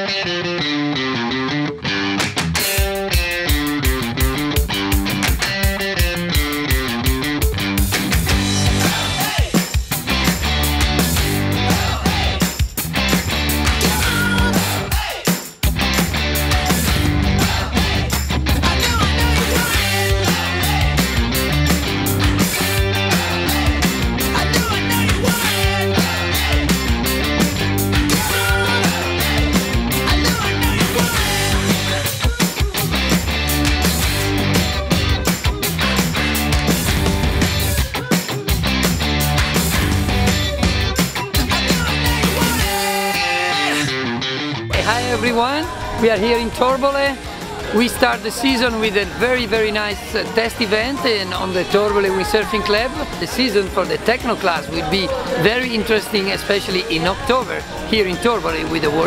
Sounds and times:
Techno: 0:02.8 - 0:43.9, 0:44.7 - 0:59.0.

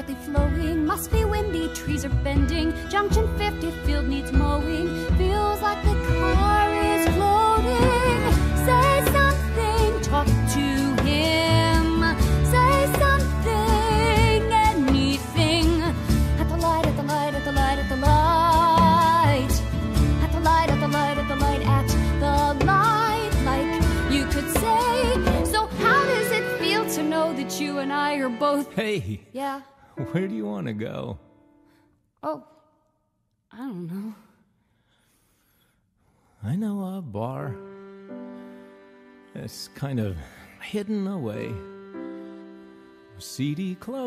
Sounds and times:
Music: 0:00.0 - 0:32.4, 0:36.5 - 0:44.0.

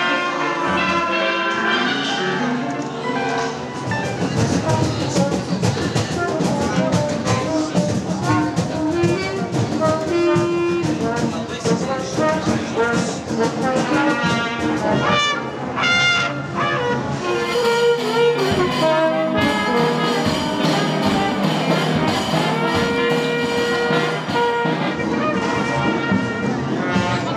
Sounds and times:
Traditional music: 0:00.0 - 0:15.8, 0:16.5 - 0:27.3
Speech: 0:00.0 - 0:27.3.

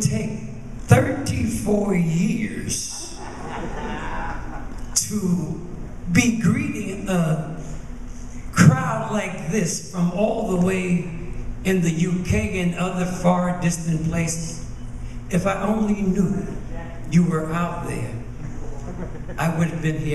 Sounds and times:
Speech: 0:00.0 - 0:03.2, 0:05.0 - 0:07.6, 0:08.5 - 0:14.7, 0:15.3 - 0:18.3, 0:19.4 - 0:20.1.

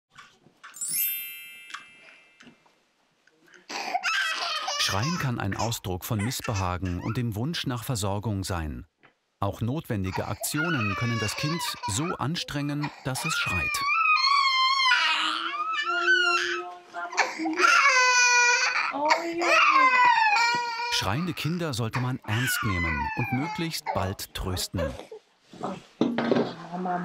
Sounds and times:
Speech: 0:04.8 - 0:13.9, 0:20.9 - 0:25.8, 0:26.5 - 0:27.0.

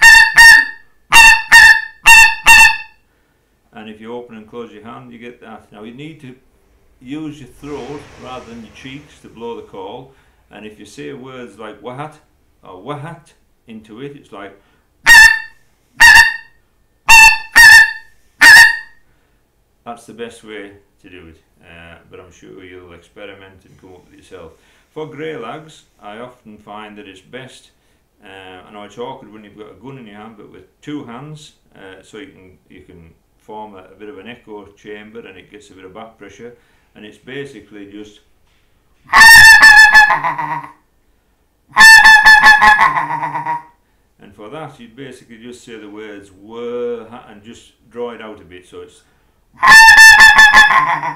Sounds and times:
Speech: 0:03.7 - 0:06.4, 0:07.0 - 0:14.6, 0:19.8 - 0:38.3, 0:44.2 - 0:49.1.

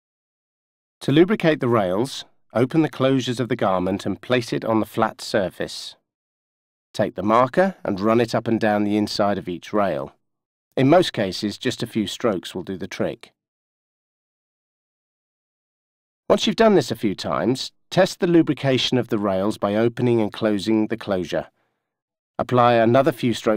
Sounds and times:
Speech: 0:01.0 - 0:06.0, 0:07.0 - 0:10.2, 0:10.8 - 0:13.4, 0:16.3 - 0:21.6, 0:22.4 - 0:23.5.

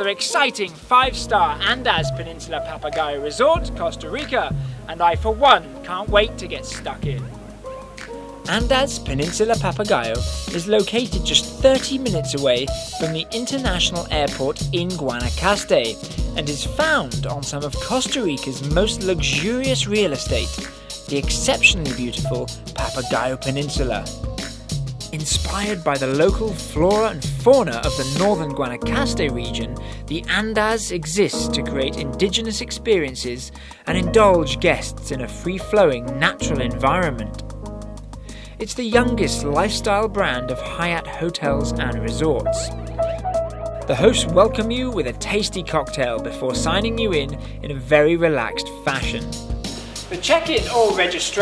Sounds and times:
Speech: 0:00.0 - 0:07.3, 0:08.5 - 0:24.1, 0:25.1 - 0:37.4, 0:38.6 - 0:42.7, 0:43.9 - 0:49.3, 0:50.1 - 0:51.4
Music: 0:00.0 - 0:51.4.

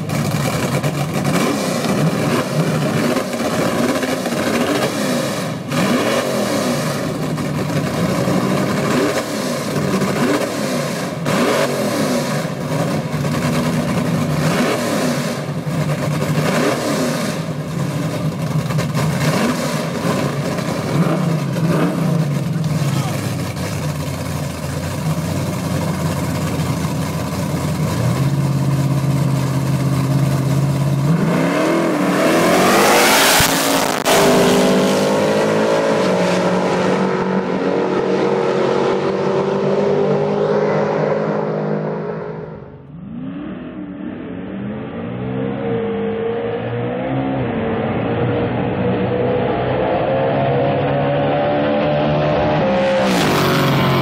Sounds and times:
Race car, auto racing: 0:00.0 - 0:54.0.

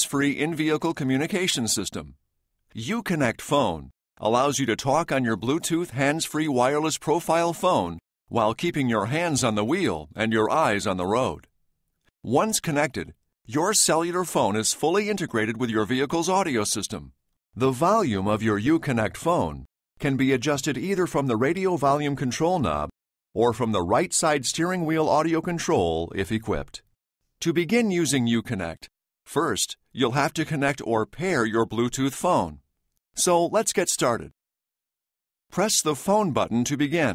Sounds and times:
Speech: 0:00.0 - 0:11.5, 0:12.2 - 0:32.6, 0:33.2 - 0:34.4, 0:35.5 - 0:37.1.

